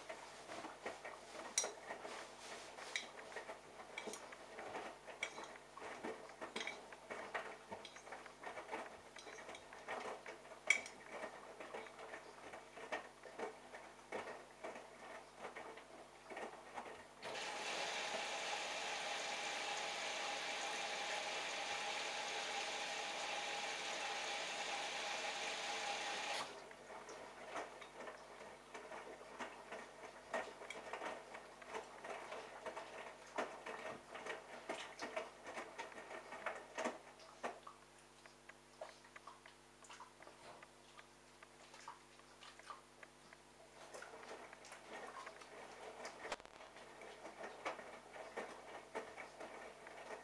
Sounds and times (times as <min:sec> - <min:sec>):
Inside, small room: 0:00.0 - 0:50.2.